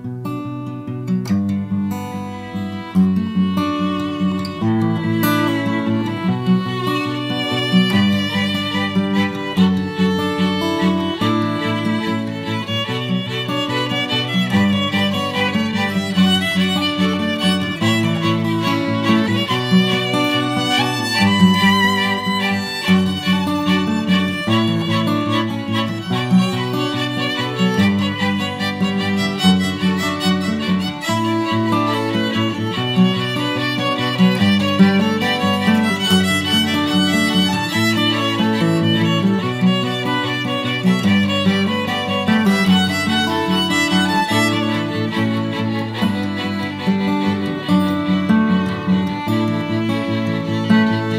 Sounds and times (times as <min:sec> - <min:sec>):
Music: 0:00.0 - 0:51.1.